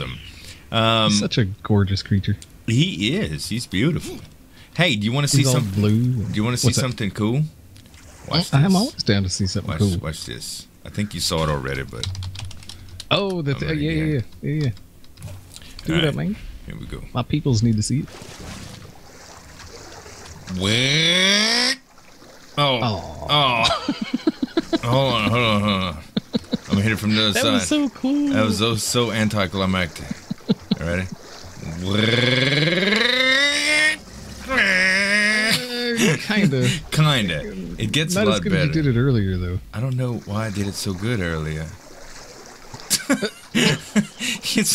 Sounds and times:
Speech: 0:00.0 - 0:07.5, 0:08.3 - 0:12.1, 0:13.1 - 0:14.8, 0:15.8 - 0:18.1, 0:20.5 - 0:21.0, 0:22.6 - 0:23.7, 0:24.8 - 0:32.9, 0:35.5 - 0:41.8, 0:43.6 - 0:44.7.

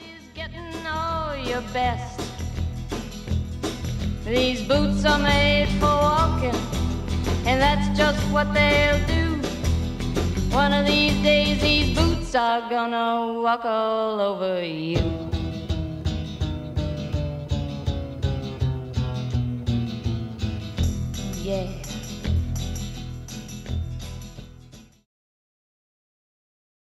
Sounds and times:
Music: 0:00.0 - 0:12.4, 0:14.9 - 0:25.1.

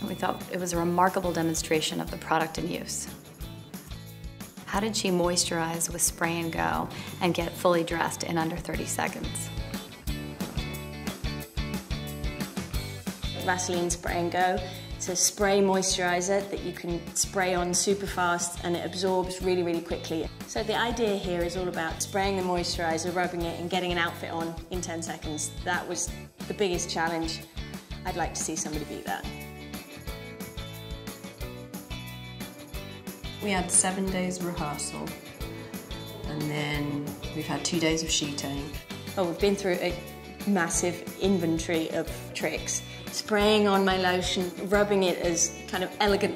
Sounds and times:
Speech: 0:00.0 - 0:03.1, 0:04.7 - 0:09.5, 0:13.4 - 0:27.4, 0:28.1 - 0:29.3, 0:33.4 - 0:35.2, 0:36.3 - 0:46.3
Music: 0:00.0 - 0:46.3.

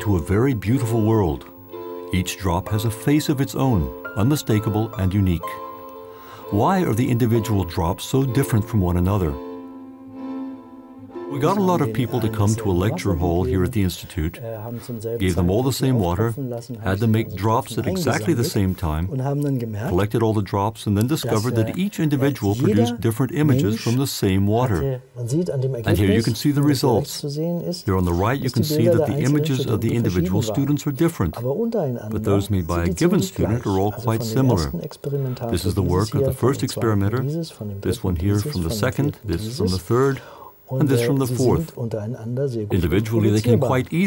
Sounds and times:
Speech: 0:00.0 - 0:01.5, 0:02.1 - 0:05.6, 0:06.5 - 0:09.4, 0:11.3 - 0:44.0
Music: 0:00.0 - 0:20.0, 0:25.5 - 0:39.8, 0:42.7 - 0:44.0.

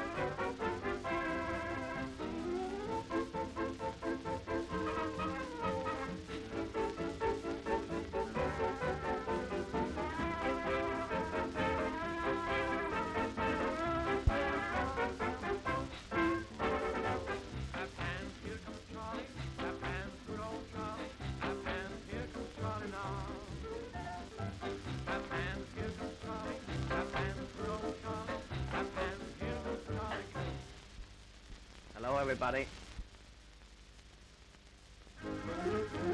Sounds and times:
Music: 0:00.0 - 0:31.3, 0:34.9 - 0:36.1.

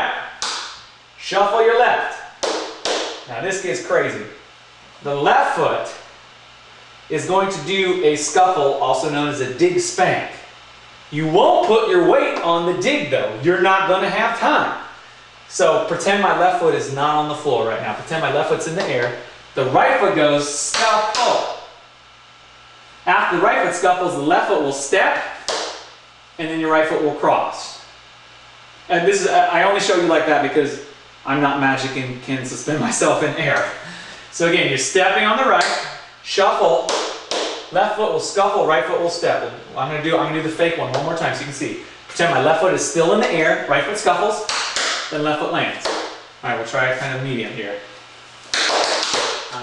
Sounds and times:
Speech: 0:00.0 - 0:00.4, 0:01.2 - 0:02.4, 0:03.3 - 0:04.4, 0:05.0 - 0:06.1, 0:07.1 - 0:10.5, 0:11.1 - 0:14.9, 0:15.5 - 0:21.7, 0:23.0 - 0:25.4, 0:26.4 - 0:27.9, 0:28.9 - 0:37.1, 0:37.7 - 0:48.0.

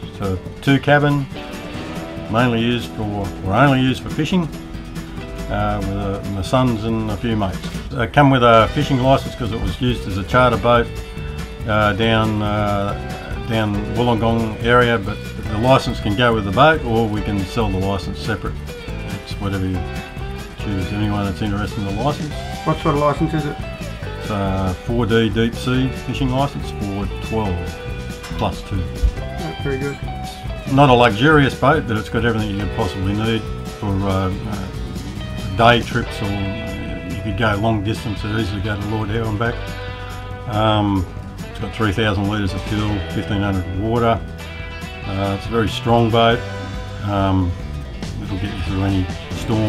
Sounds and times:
Speech: 0:00.0 - 0:01.3, 0:02.3 - 0:04.6, 0:05.5 - 0:10.9, 0:11.6 - 0:18.5, 0:19.1 - 0:20.0, 0:20.6 - 0:23.6, 0:24.3 - 0:34.8, 0:35.5 - 0:39.6, 0:40.5 - 0:44.2, 0:45.0 - 0:46.4, 0:47.0 - 0:47.6, 0:48.2 - 0:49.6
Music: 0:00.0 - 0:49.6.

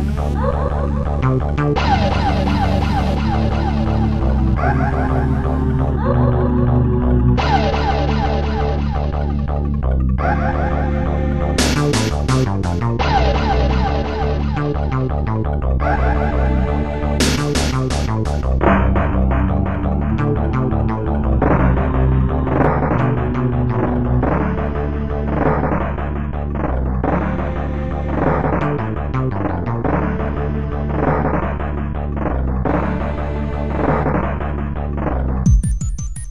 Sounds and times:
Music: 0:00.0 - 0:36.3.

